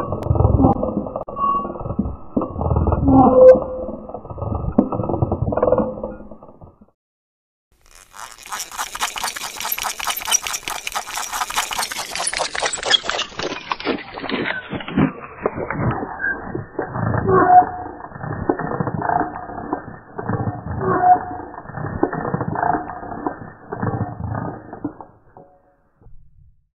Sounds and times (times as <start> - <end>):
Creak: 7.8 - 26.1
Mechanisms: 7.8 - 26.6.